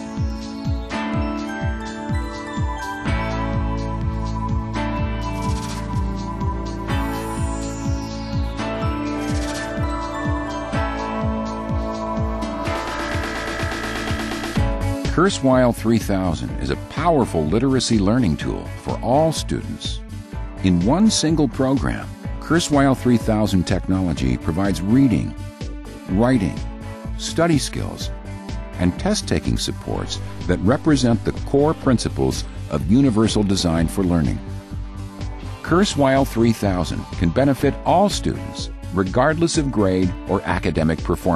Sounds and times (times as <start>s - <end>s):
Music: 0.0s - 41.3s
Speech: 15.1s - 20.0s, 20.6s - 25.4s, 26.1s - 28.1s, 28.8s - 34.4s, 35.6s - 41.3s.